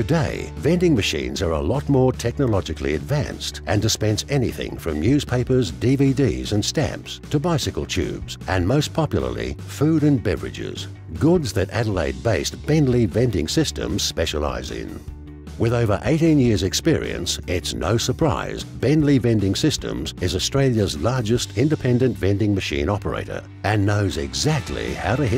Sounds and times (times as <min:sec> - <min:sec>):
Speech: 0:00.0 - 0:15.0, 0:15.6 - 0:25.3
Music: 0:00.0 - 0:25.3.